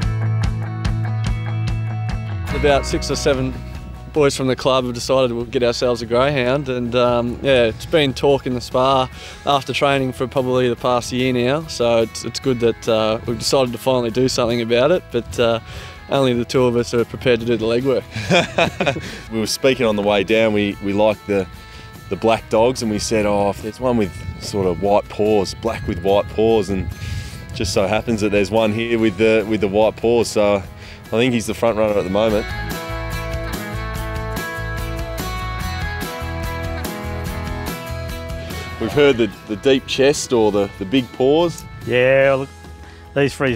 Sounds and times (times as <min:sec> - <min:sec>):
Music: 0:00.0 - 0:43.5
Speech: 0:02.6 - 0:03.6, 0:04.2 - 0:18.0, 0:19.3 - 0:21.5, 0:22.1 - 0:26.9, 0:27.6 - 0:32.5, 0:38.8 - 0:42.5, 0:43.2 - 0:43.5.